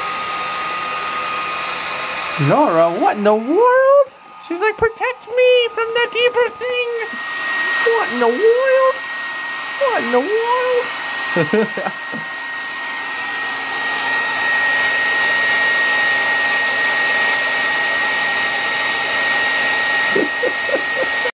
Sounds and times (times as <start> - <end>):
Hair dryer: 0.0 - 21.3.